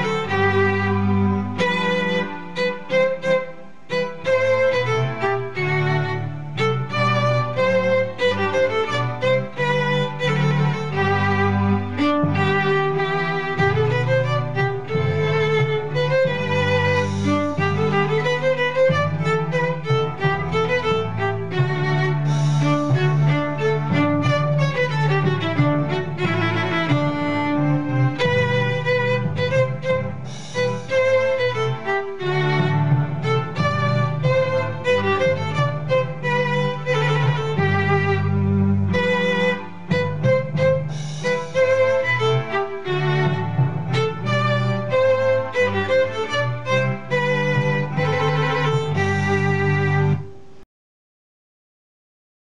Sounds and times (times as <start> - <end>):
Violin, fiddle: 0.0 - 50.6.